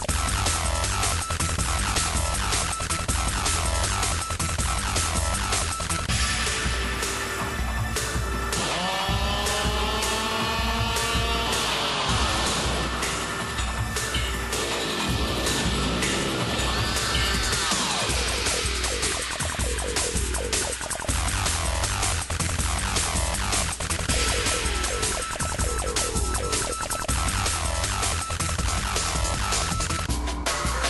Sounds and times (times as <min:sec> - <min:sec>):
Music: 0:00.0 - 0:30.9.